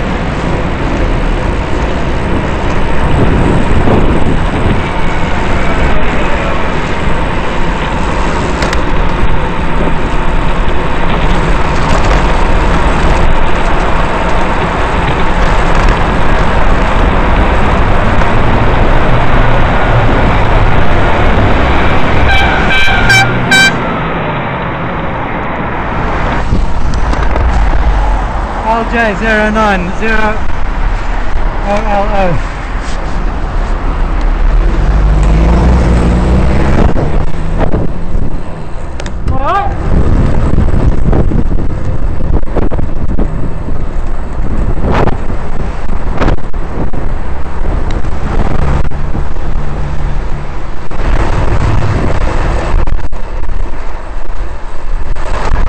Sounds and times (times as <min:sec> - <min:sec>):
Bus: 0:00.0 - 0:55.6.